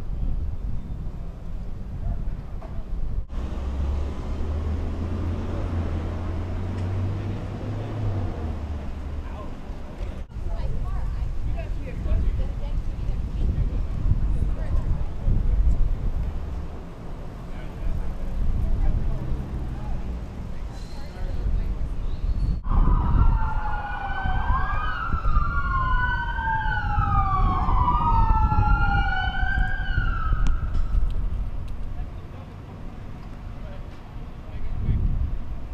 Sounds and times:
Police car (siren): 0:22.7 - 0:31.0.

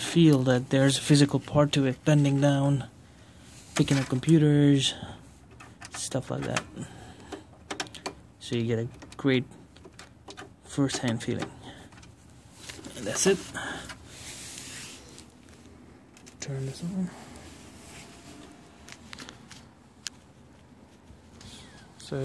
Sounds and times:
Speech: 0:00.0 - 0:02.9, 0:03.8 - 0:05.1, 0:06.0 - 0:06.8, 0:08.4 - 0:09.6, 0:10.7 - 0:11.6, 0:12.9 - 0:13.6, 0:16.4 - 0:17.3, 0:21.5 - 0:22.2
Inside, small room: 0:00.0 - 0:22.2.

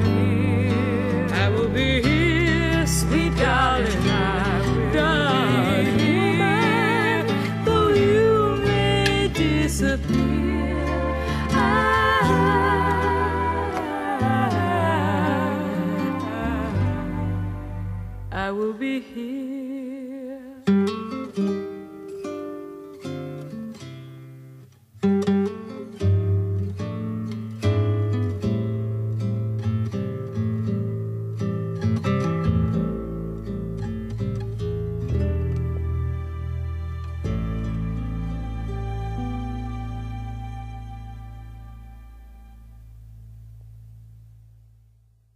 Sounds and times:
Sad music: 0:00.0 - 0:18.5, 0:35.0 - 0:43.0.

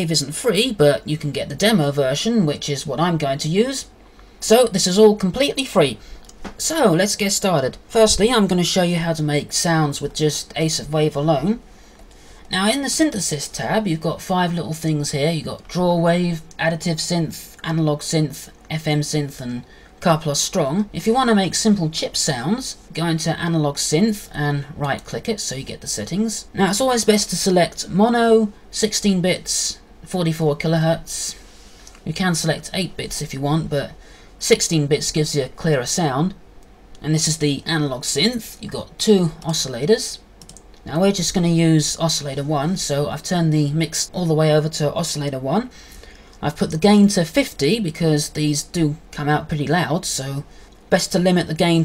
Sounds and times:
Speech: 0:00.0 - 0:11.6, 0:12.5 - 0:31.4, 0:32.0 - 0:36.4, 0:37.0 - 0:45.8, 0:46.4 - 0:51.8.

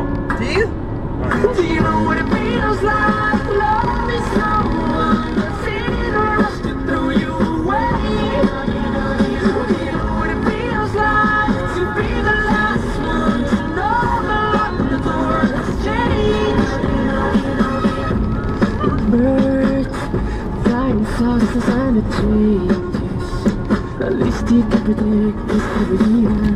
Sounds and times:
Music: 0:00.0 - 0:26.5.

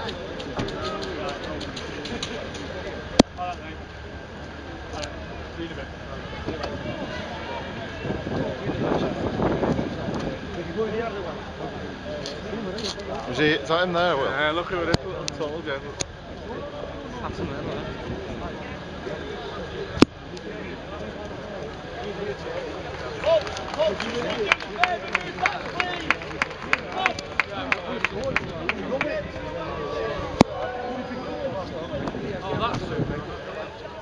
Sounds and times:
Speech: 0:00.0 - 0:34.0.

